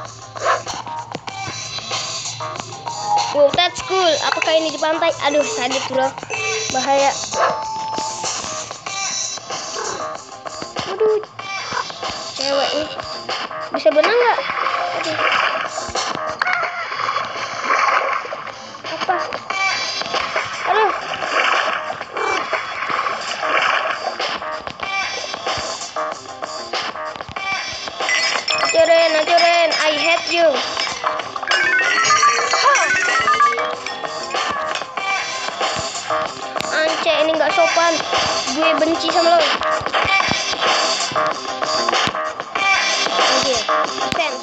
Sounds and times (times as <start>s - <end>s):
Music: 0.0s - 44.4s
Speech: 3.4s - 7.2s, 12.4s - 13.0s, 13.8s - 15.2s, 28.7s - 30.6s, 36.7s - 39.6s, 43.2s - 44.4s.